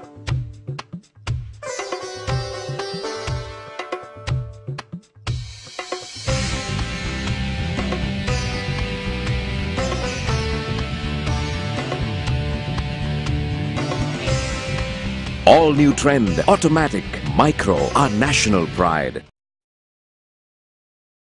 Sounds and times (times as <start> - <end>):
Music: 0.0 - 19.3
Speech: 15.5 - 19.3.